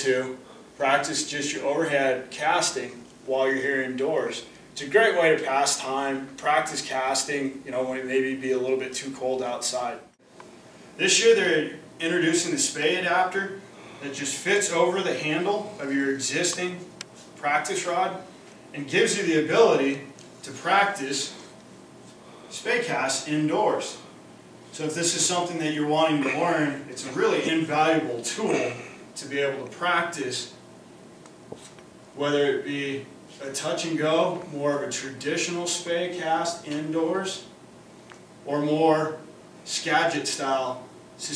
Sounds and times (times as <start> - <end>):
Speech: 0.0 - 10.1, 11.0 - 21.4, 22.5 - 24.1, 24.7 - 30.6, 32.2 - 37.5, 38.4 - 41.3.